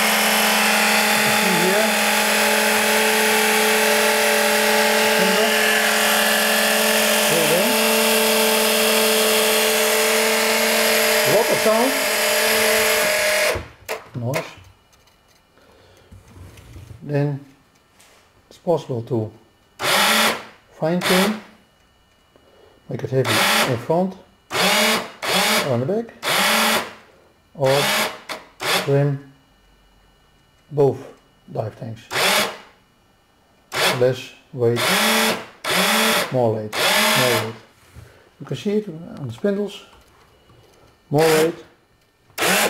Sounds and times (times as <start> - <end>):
Inside, small room: 0.0 - 42.6
Speech: 1.3 - 2.0, 5.2 - 5.6, 7.2 - 7.8, 11.2 - 12.0, 14.2 - 14.6, 17.0 - 17.5, 18.5 - 19.4, 20.8 - 21.4, 22.9 - 24.3, 25.6 - 26.2, 27.6 - 27.9, 28.9 - 29.3, 30.7 - 32.1, 33.9 - 34.8, 36.3 - 37.6, 38.4 - 39.9, 41.1 - 41.7.